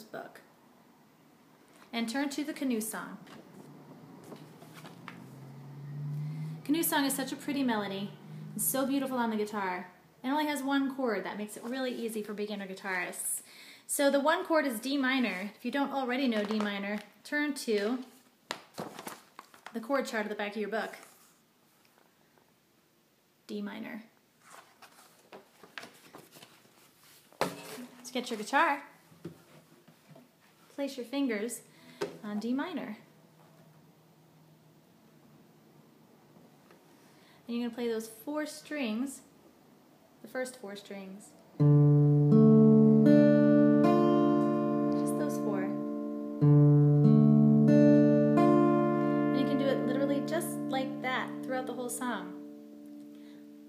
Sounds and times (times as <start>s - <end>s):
Speech: 0.0s - 0.5s, 1.9s - 3.3s, 6.7s - 18.2s, 19.7s - 21.0s, 23.5s - 24.2s, 28.0s - 29.0s, 30.8s - 33.1s, 37.5s - 39.3s, 40.2s - 41.4s, 45.0s - 45.8s, 49.4s - 52.4s.